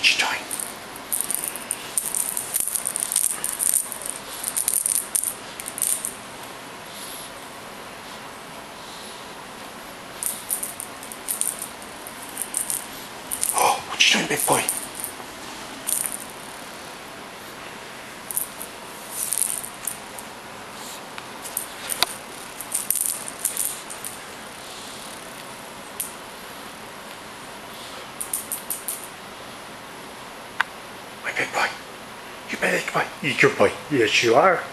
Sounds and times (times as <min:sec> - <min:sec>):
Inside, small room: 0:00.0 - 0:34.7.